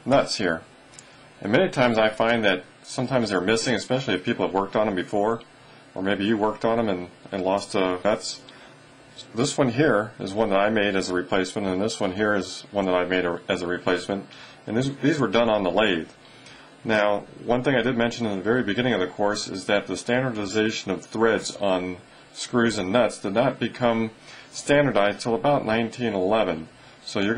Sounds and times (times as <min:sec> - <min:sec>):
Speech: 0:00.0 - 0:00.7, 0:01.4 - 0:08.5, 0:09.2 - 0:16.2, 0:16.8 - 0:27.3.